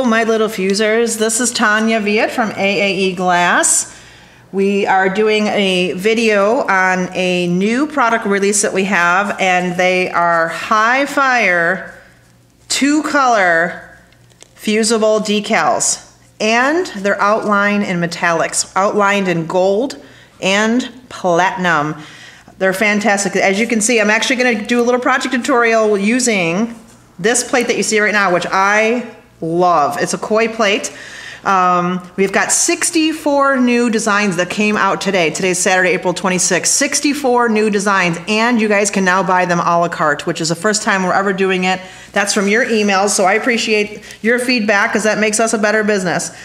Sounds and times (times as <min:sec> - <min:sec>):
Speech: 0:00.0 - 0:03.9, 0:04.5 - 0:12.0, 0:12.7 - 0:14.0, 0:14.6 - 0:22.0, 0:22.6 - 0:46.4.